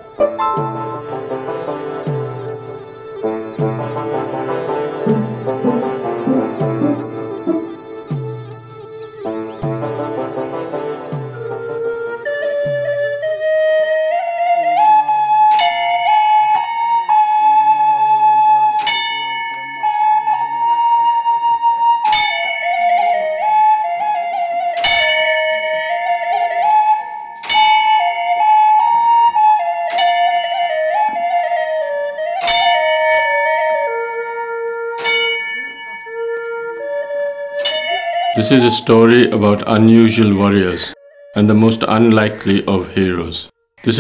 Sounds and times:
Flute: 0.0s - 43.3s.

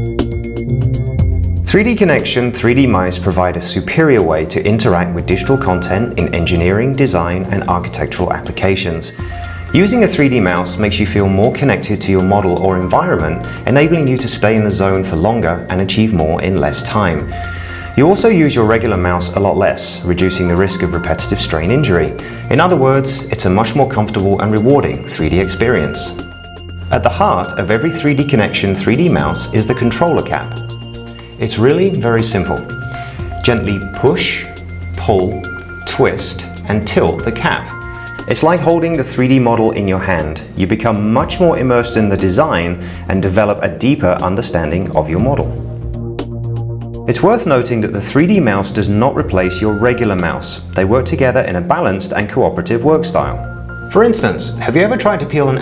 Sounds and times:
Music: 0.0s - 55.6s
Speech: 1.7s - 26.2s, 26.9s - 30.7s, 31.4s - 32.8s, 33.4s - 45.6s, 47.1s - 55.6s.

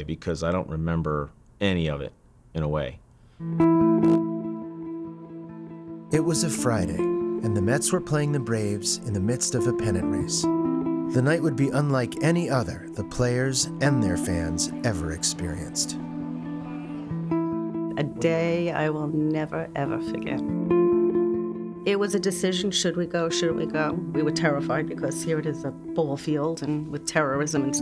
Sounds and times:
Speech: 0.0s - 3.0s, 6.2s - 10.5s, 11.2s - 16.0s, 18.0s - 20.4s
Music: 3.3s - 27.8s.

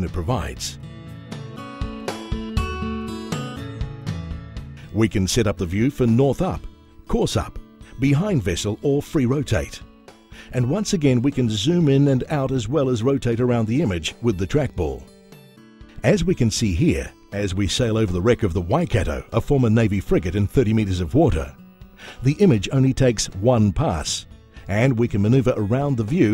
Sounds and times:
Speech: 0.0s - 0.8s, 4.9s - 9.9s, 10.5s - 15.0s, 16.0s - 21.6s, 22.2s - 26.3s
Music: 0.0s - 26.3s.

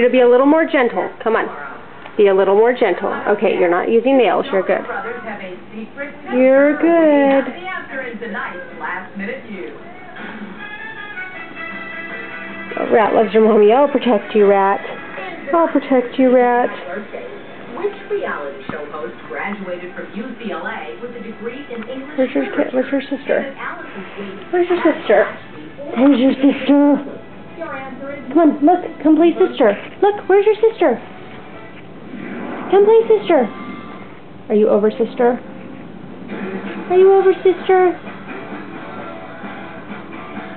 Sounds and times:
Music: 5.0s - 40.5s.

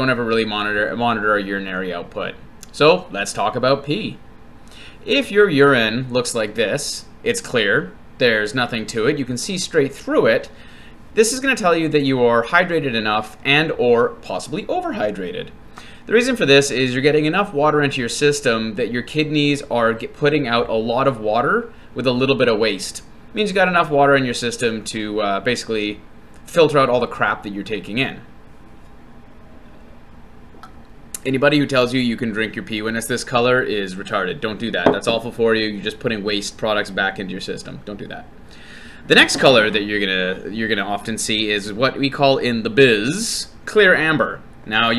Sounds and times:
Speech: 0.0s - 4.2s, 5.1s - 10.6s, 11.2s - 28.3s, 31.2s - 38.3s, 39.1s - 44.9s.

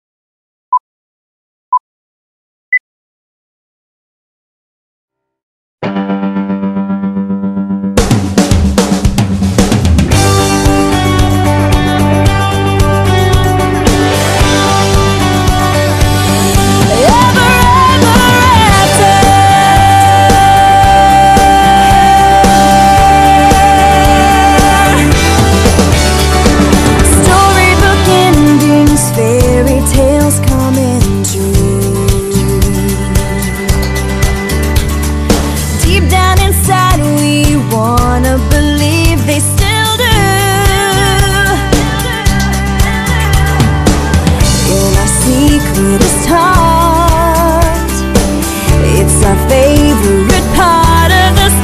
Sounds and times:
Drum kit: 8.0s - 51.6s.

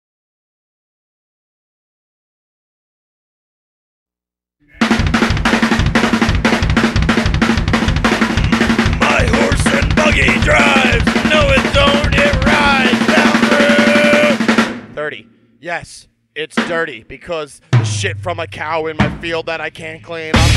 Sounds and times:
Music: 4.6s - 15.0s, 17.7s - 20.5s.

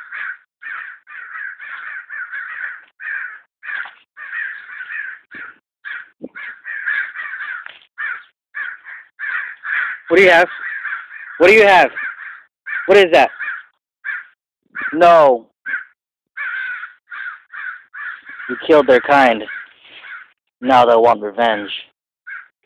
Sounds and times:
Caw: 0.0s - 15.0s, 15.7s - 20.4s, 22.3s - 22.6s
Speech: 10.1s - 10.5s, 11.4s - 12.0s, 12.9s - 13.3s, 14.9s - 15.4s, 18.5s - 19.5s, 20.6s - 21.9s.

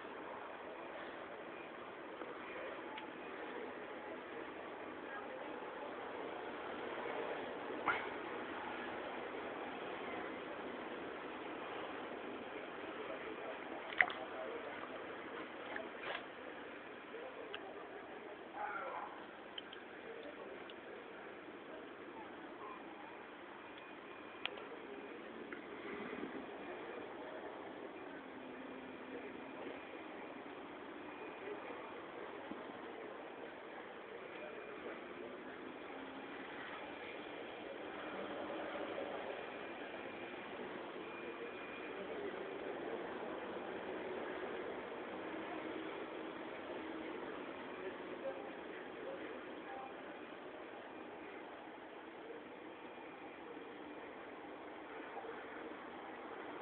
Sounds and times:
Engine: 0.0s - 19.3s, 23.8s - 51.7s.

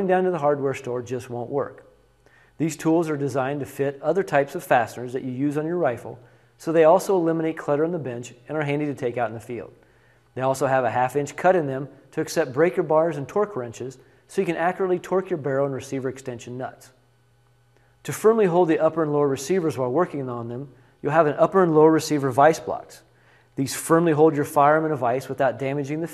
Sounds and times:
Speech: 0.0s - 1.9s, 2.6s - 9.8s, 10.4s - 17.0s, 18.0s - 26.1s.

